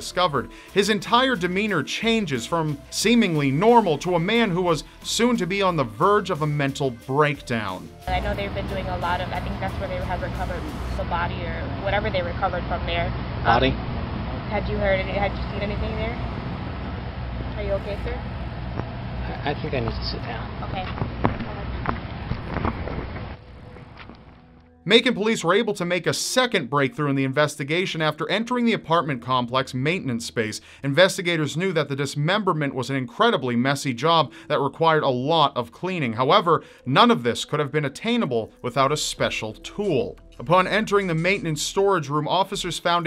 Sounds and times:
Speech: 0.0s - 13.8s, 14.5s - 16.2s, 17.6s - 18.2s, 24.9s - 43.0s.

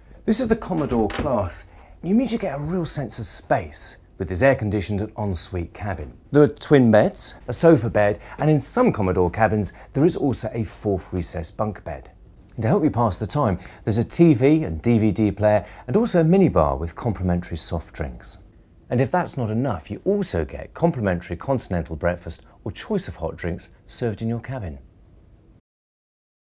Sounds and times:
Speech: 0.2s - 24.9s.

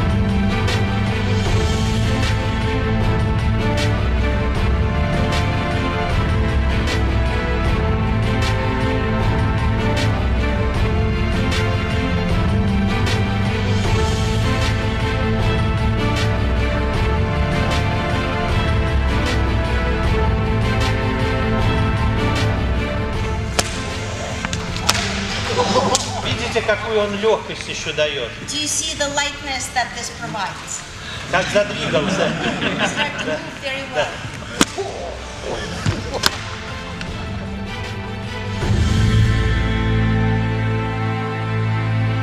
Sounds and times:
Inside, large room or hall: 0.0s - 42.2s
Music: 0.0s - 42.2s.

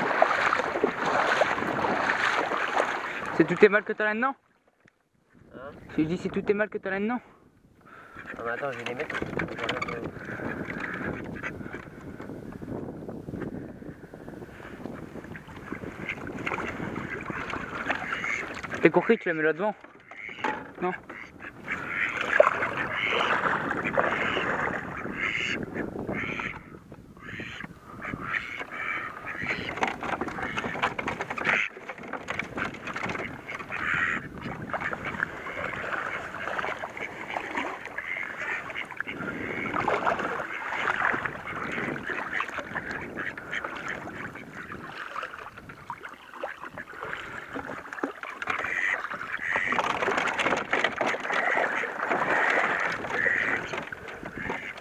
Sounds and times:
Duck: 7.9s - 11.9s, 16.0s - 19.2s, 20.0s - 31.7s, 32.3s - 45.0s, 48.4s - 54.8s.

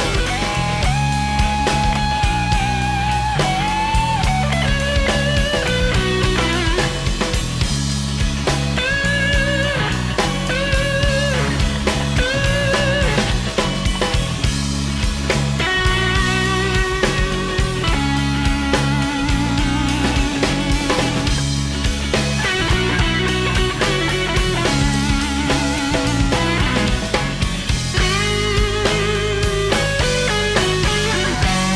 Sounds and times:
Guitar: 0.0s - 31.7s
Progressive rock: 0.0s - 31.7s
Psychedelic rock: 0.0s - 31.7s.

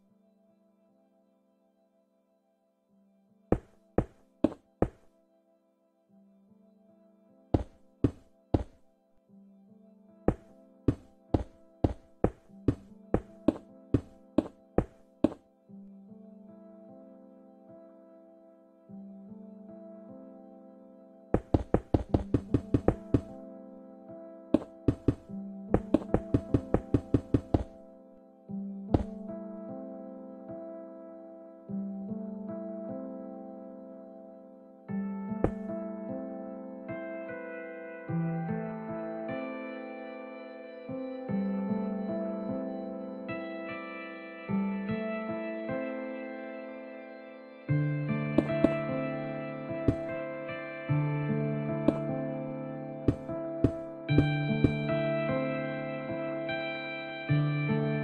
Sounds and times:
Music: 0.0s - 58.0s.

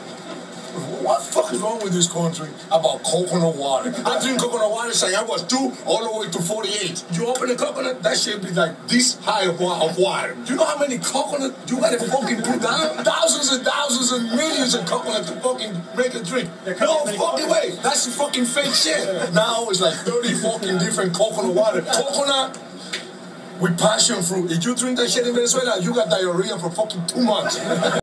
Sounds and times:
Speech: 0.8s - 22.6s, 23.6s - 28.0s.

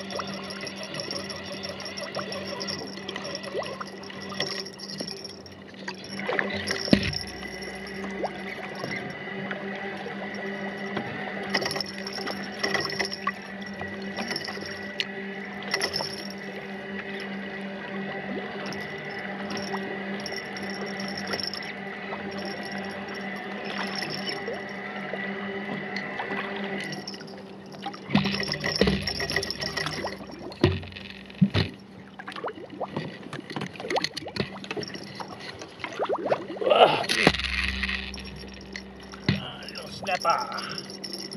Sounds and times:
Boat, Water vehicle: 0.0s - 41.3s.

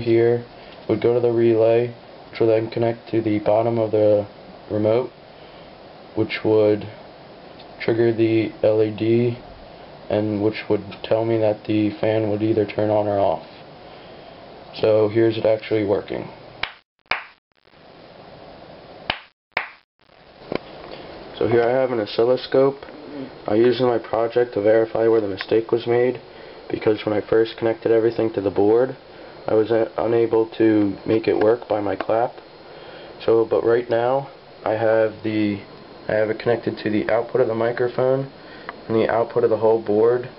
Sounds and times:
Speech: 0.0s - 5.2s, 6.2s - 7.0s, 7.8s - 9.4s, 10.1s - 13.5s, 14.7s - 16.4s, 21.4s - 32.4s, 33.2s - 40.3s.

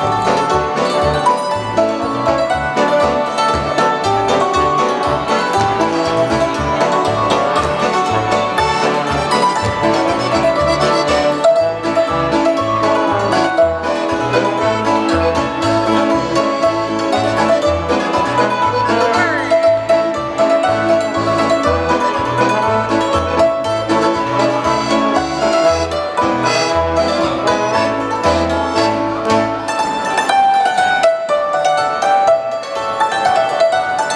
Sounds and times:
Accordion: 0.0s - 30.4s
Orchestra: 0.0s - 34.1s.

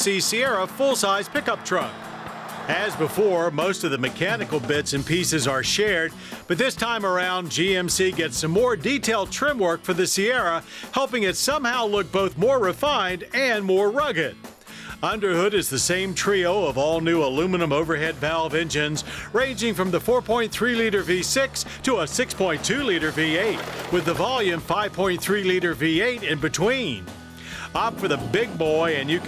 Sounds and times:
Speech: 0.0s - 2.0s, 2.7s - 14.4s, 15.0s - 27.0s, 27.7s - 29.2s
Music: 0.0s - 29.2s.

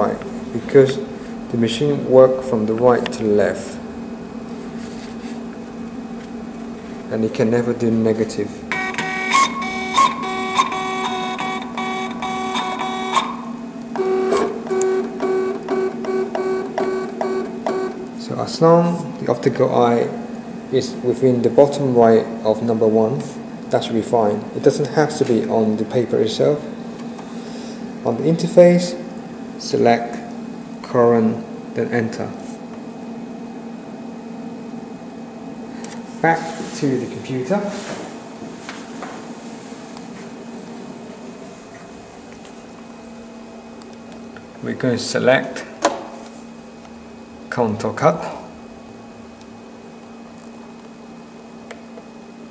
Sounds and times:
Speech: 0.0s - 3.8s, 7.1s - 8.6s, 18.2s - 26.7s, 28.0s - 32.6s, 36.2s - 38.0s, 44.6s - 45.8s, 47.5s - 48.5s.

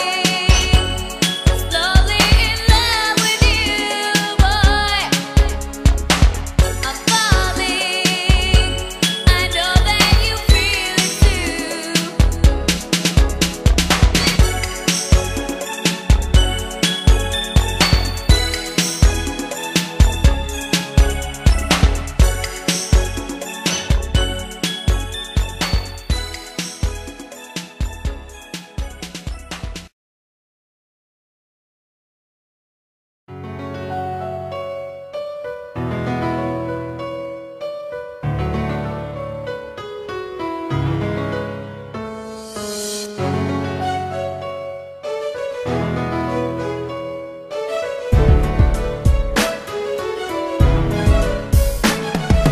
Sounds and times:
Electric piano: 33.4s - 52.5s.

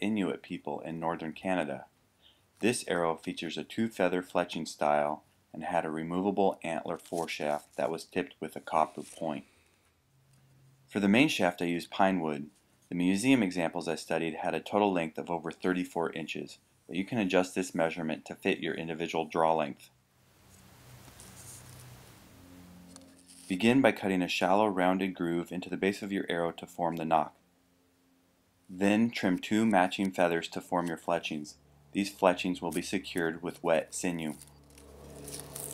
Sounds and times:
Speech: 0.0s - 1.9s, 2.6s - 9.5s, 11.0s - 19.9s, 23.5s - 27.4s, 28.7s - 34.4s.

